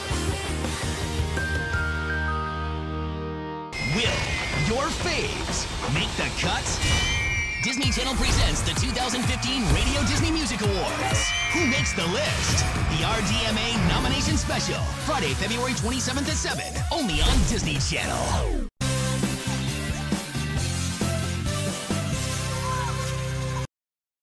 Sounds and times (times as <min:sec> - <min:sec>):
Music: 0:00.0 - 0:23.7
Speech: 0:03.8 - 0:06.8, 0:07.6 - 0:18.4.